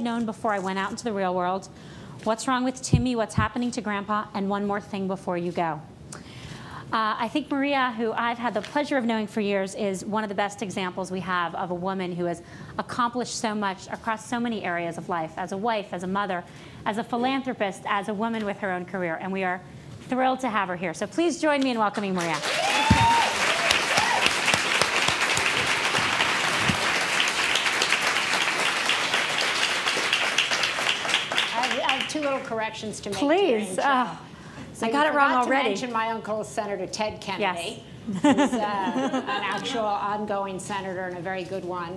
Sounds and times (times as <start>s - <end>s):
Female speech, woman speaking: 0.0s - 5.9s, 6.9s - 22.4s, 31.5s - 34.2s, 34.8s - 41.9s.